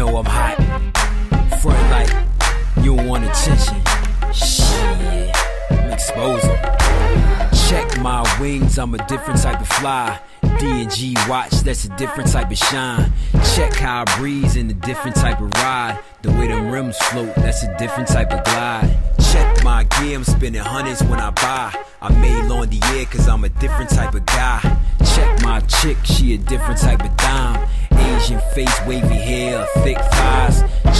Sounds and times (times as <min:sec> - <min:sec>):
Music: 0:00.0 - 0:30.9.